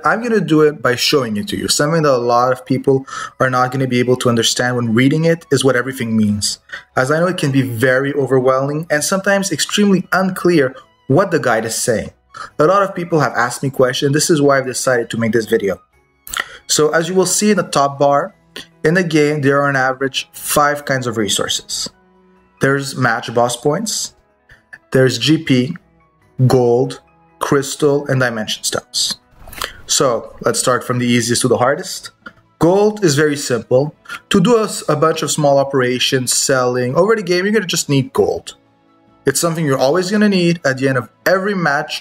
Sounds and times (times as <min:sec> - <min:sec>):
Speech: 0:00.0 - 0:22.0, 0:22.6 - 0:25.8, 0:26.4 - 0:29.2, 0:29.9 - 0:38.6, 0:39.3 - 0:42.0.